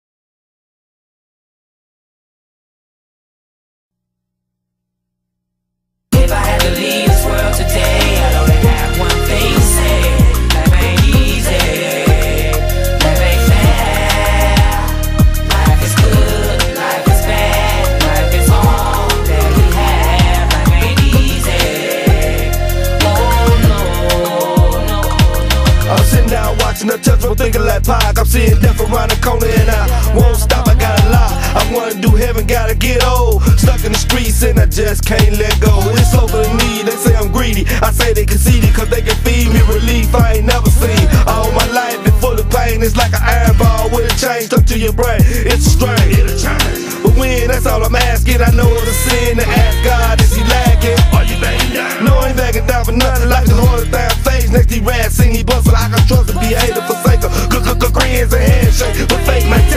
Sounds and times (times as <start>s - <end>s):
Music: 6.2s - 59.7s.